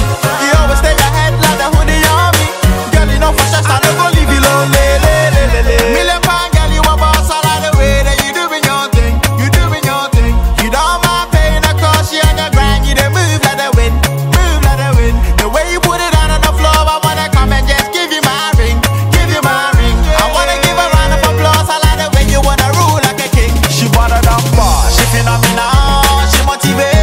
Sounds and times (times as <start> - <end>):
Afrobeat: 0.0 - 27.0.